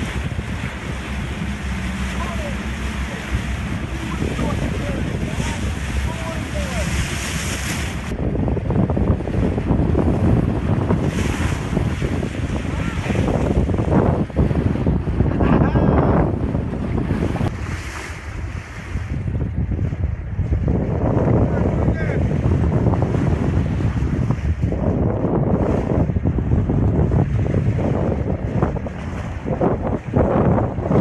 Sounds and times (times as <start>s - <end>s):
Waves, surf: 0.0s - 31.0s
Wind noise (microphone): 0.0s - 31.0s.